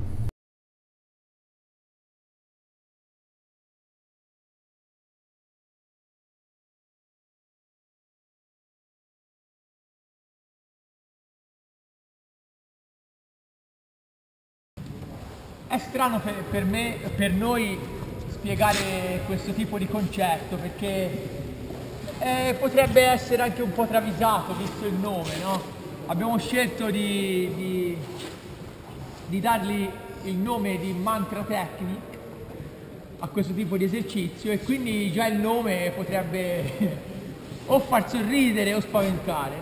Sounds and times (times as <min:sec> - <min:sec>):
Speech: 0:15.7 - 0:21.4, 0:22.1 - 0:28.2, 0:29.3 - 0:32.2, 0:33.2 - 0:37.1, 0:37.7 - 0:39.6.